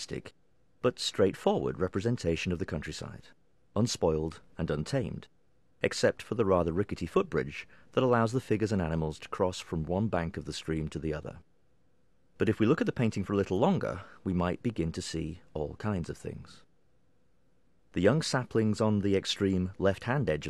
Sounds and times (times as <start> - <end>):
Speech: 0.0 - 11.5, 12.4 - 16.7, 17.9 - 20.4.